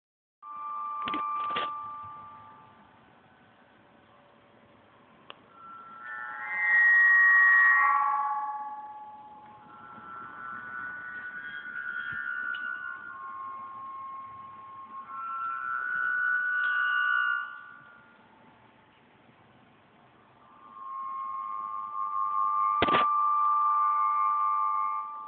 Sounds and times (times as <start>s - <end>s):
Wind: 0.5s - 6.4s, 7.9s - 25.2s.